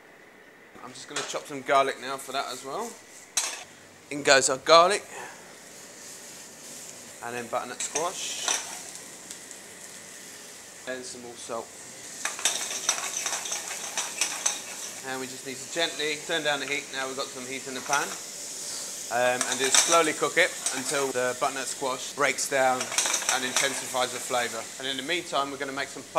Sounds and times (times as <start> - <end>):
Speech: 0.8 - 3.0, 4.1 - 5.3, 7.2 - 8.5, 10.9 - 11.7, 15.0 - 18.2, 19.1 - 26.1.